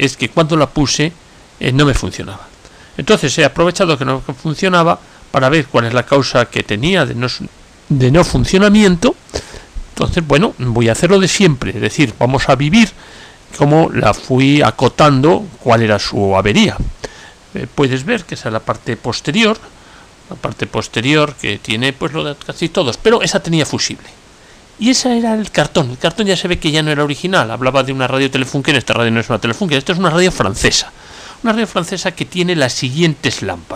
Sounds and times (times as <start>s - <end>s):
Speech: 0.0s - 9.2s, 10.0s - 19.7s, 20.3s - 24.2s, 24.8s - 33.7s.